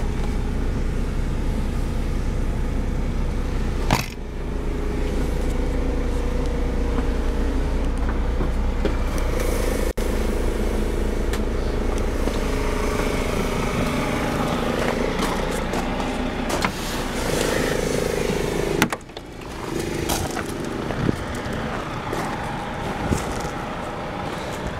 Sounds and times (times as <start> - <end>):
Bus: 0.0 - 24.7.